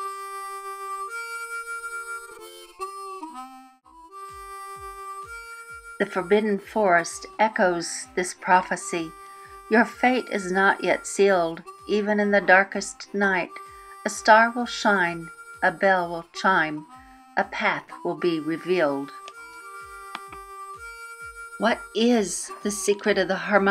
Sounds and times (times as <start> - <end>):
Music: 0.0 - 23.7
Speech: 6.0 - 9.1, 9.7 - 16.8, 17.4 - 19.1, 21.6 - 23.7.